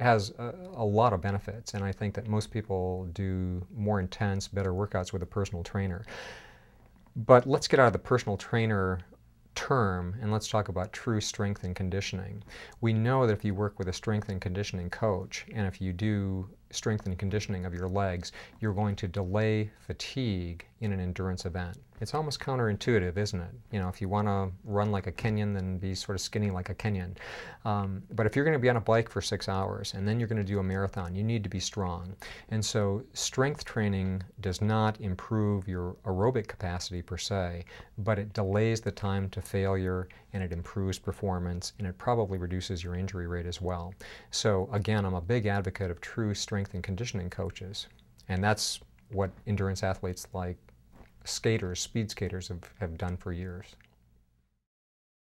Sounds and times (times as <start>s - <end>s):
Speech: 0.0s - 6.1s, 7.2s - 53.9s.